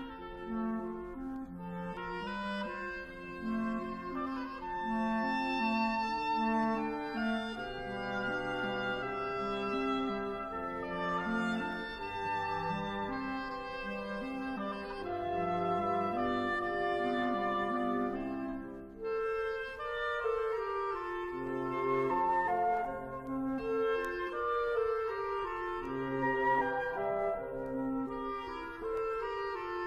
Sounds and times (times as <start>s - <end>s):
Music: 0.0s - 29.8s.